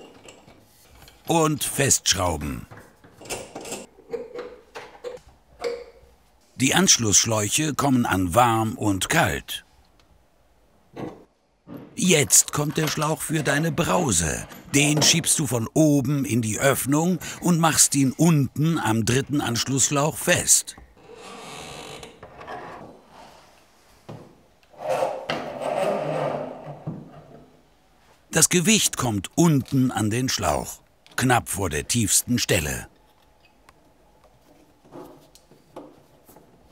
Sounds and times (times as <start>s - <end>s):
Speech: 1.3s - 2.7s, 6.6s - 9.6s, 12.0s - 20.8s, 28.4s - 32.9s.